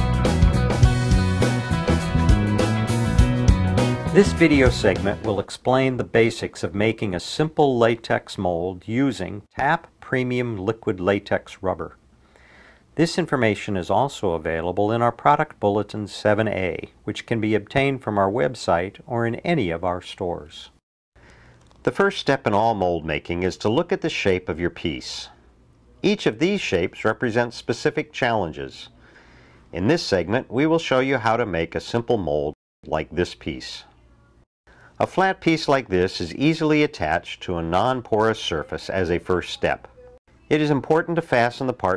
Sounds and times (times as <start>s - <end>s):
Speech: 4.1s - 12.0s, 13.0s - 20.8s, 21.8s - 29.0s, 29.7s - 34.3s, 35.0s - 41.9s.